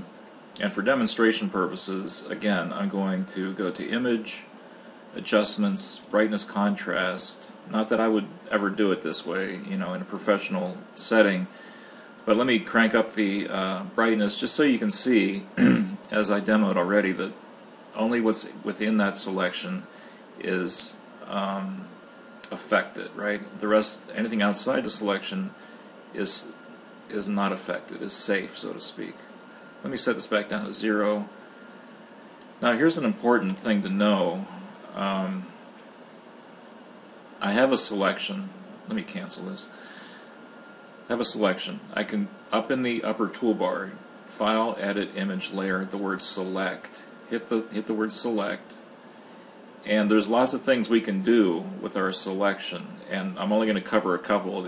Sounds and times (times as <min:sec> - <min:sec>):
Speech: 0:00.0 - 0:04.5, 0:05.1 - 0:11.6, 0:12.2 - 0:31.4, 0:32.5 - 0:35.6, 0:37.4 - 0:39.8, 0:41.0 - 0:48.9, 0:49.8 - 0:54.6.